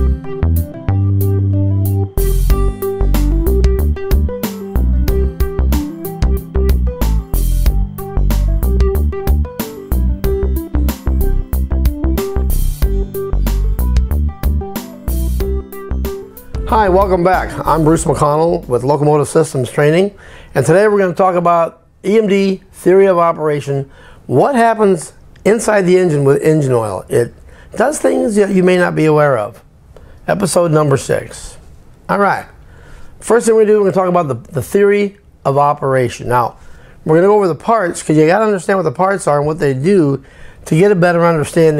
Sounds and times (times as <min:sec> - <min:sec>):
Speech: 0:16.6 - 0:29.7, 0:30.3 - 0:32.6, 0:33.2 - 0:41.7.